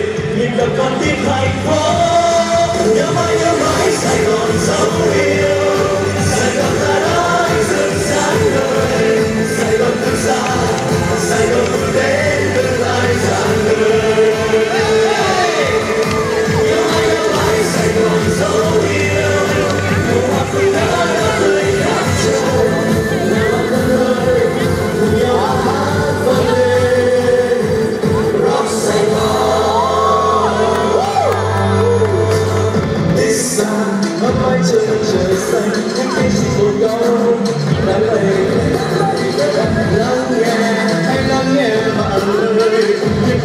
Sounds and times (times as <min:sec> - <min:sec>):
Grunge: 0:00.0 - 0:43.4
Pop music: 0:00.0 - 0:43.4
Punk rock: 0:00.0 - 0:43.4.